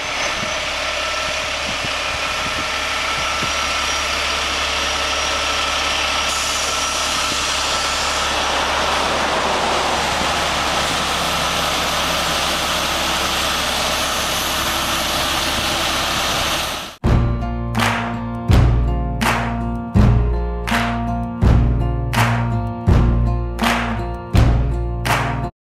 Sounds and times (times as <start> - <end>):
Music: 17.0 - 25.5.